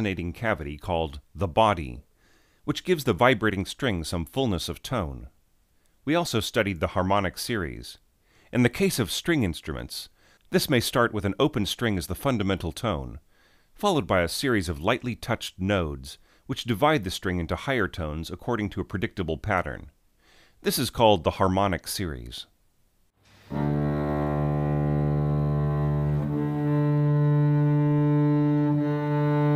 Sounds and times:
Speech: 0.0 - 5.4, 6.0 - 13.2, 13.8 - 20.0, 20.6 - 22.6
Music: 23.5 - 29.5.

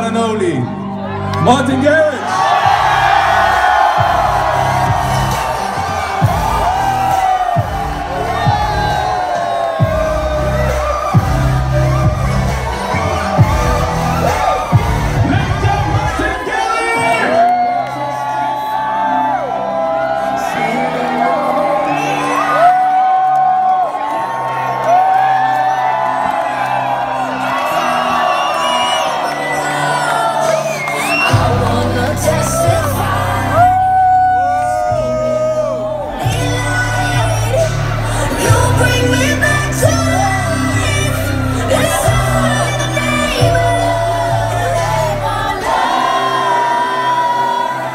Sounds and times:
Exciting music: 0.0 - 47.9
Pop music: 0.0 - 47.9.

